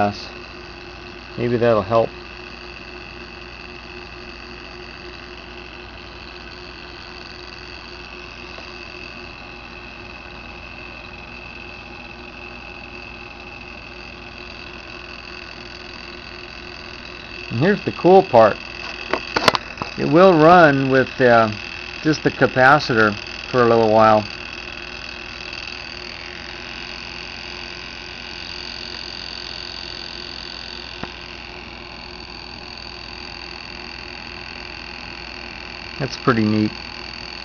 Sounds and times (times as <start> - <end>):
Speech: 1.4 - 2.1, 17.5 - 18.6, 20.0 - 24.3, 36.0 - 36.8.